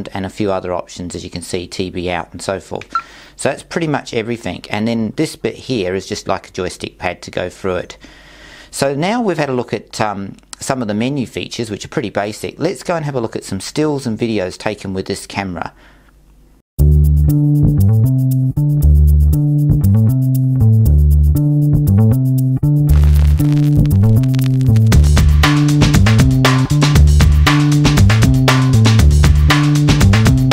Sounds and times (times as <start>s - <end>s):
Music: 16.8s - 30.5s.